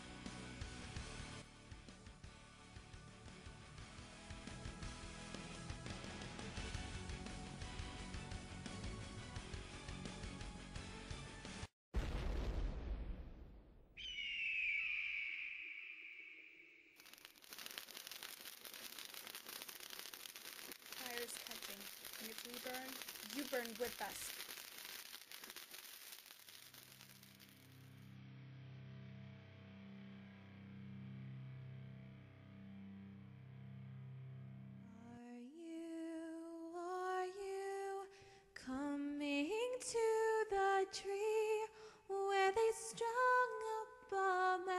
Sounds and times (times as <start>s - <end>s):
Speech: 21.0s - 24.3s.